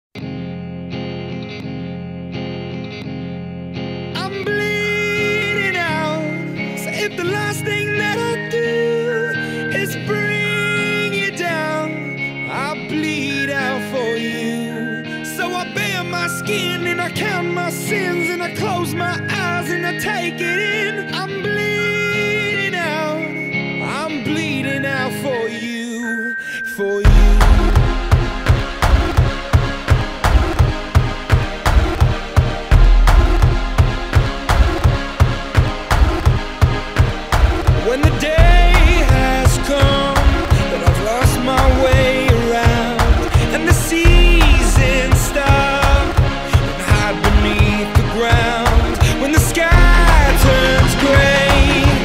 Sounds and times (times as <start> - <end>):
Musical instrument: 1.3 - 52.0.